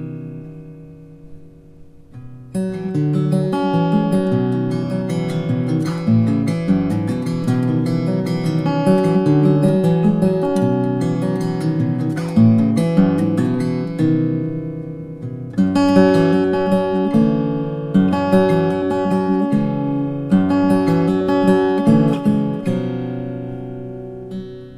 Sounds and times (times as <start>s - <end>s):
Acoustic guitar: 0.0s - 24.7s.